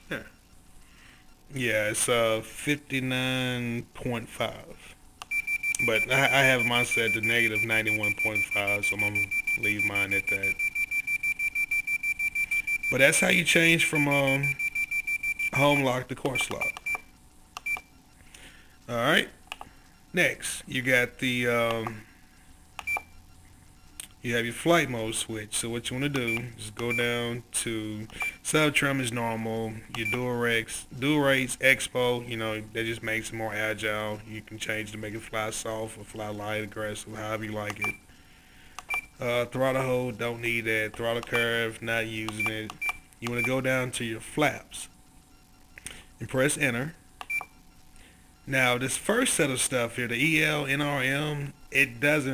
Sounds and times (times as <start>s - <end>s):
Speech: 0.0s - 0.4s, 1.5s - 5.0s, 5.8s - 10.6s, 12.9s - 14.6s, 15.6s - 16.7s, 18.9s - 19.4s, 20.1s - 22.0s, 24.2s - 38.0s, 39.2s - 45.0s, 46.2s - 47.0s, 48.5s - 52.3s
Inside, small room: 0.0s - 52.3s.